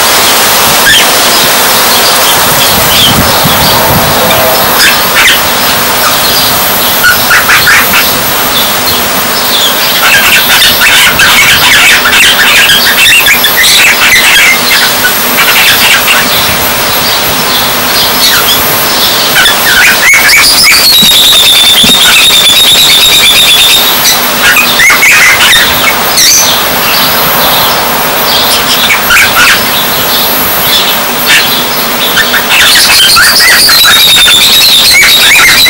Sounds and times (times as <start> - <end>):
Bird: 0.0 - 35.7.